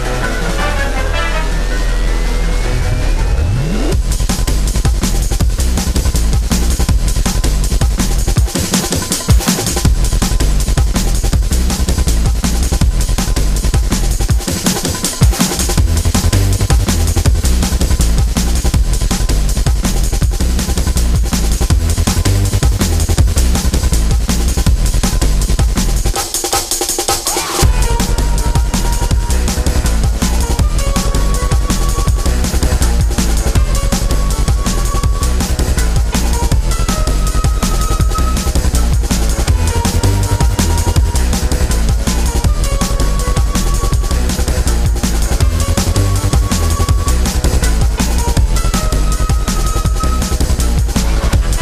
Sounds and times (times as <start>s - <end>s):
Music: 0.0s - 51.6s.